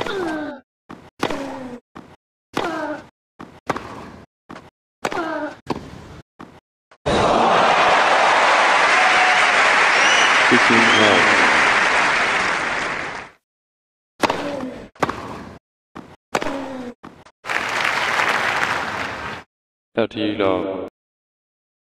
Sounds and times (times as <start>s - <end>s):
Speech: 10.5s - 11.5s, 20.0s - 20.9s.